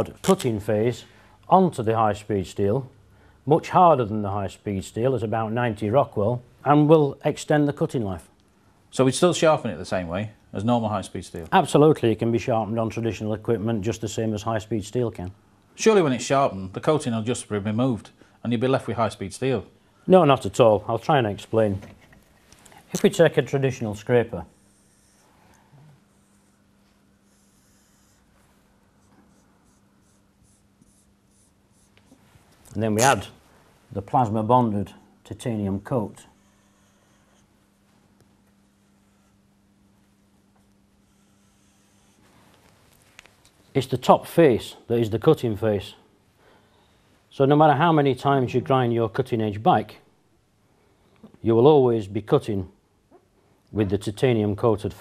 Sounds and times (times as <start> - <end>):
Speech: 0.0 - 8.3, 8.9 - 22.0, 22.9 - 24.6, 32.7 - 36.4, 43.7 - 46.1, 47.3 - 50.1, 51.4 - 52.8, 53.7 - 55.0
Writing: 29.0 - 32.2.